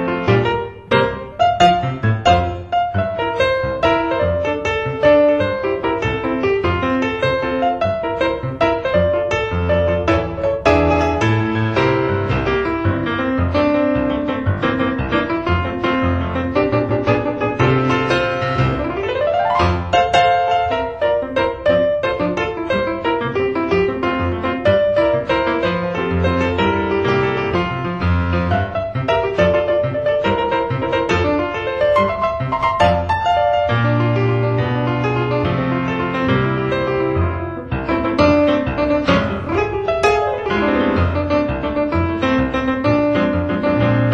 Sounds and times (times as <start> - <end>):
Music: 0.0 - 44.1.